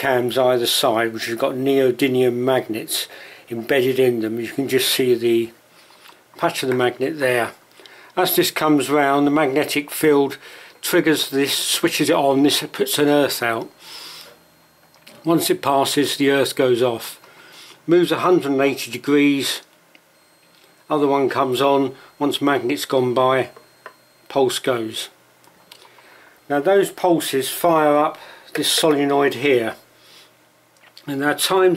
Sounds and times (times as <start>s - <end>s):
Speech: 0.0s - 5.6s, 6.4s - 7.6s, 8.2s - 13.8s, 15.2s - 17.2s, 17.9s - 19.7s, 20.9s - 23.6s, 24.3s - 25.2s, 26.5s - 29.8s, 31.0s - 31.7s.